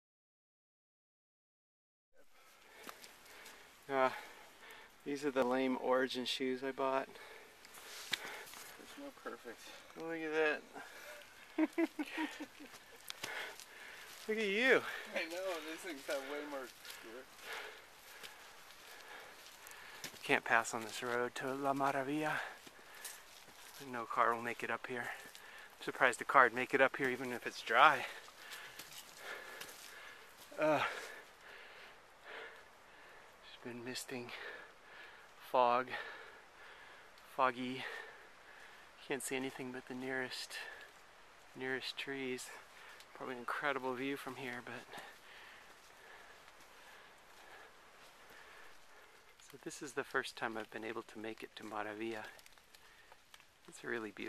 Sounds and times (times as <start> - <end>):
Walk, footsteps: 2.7 - 3.6, 7.7 - 8.8, 11.6 - 23.9, 28.0 - 31.2, 50.4 - 53.7.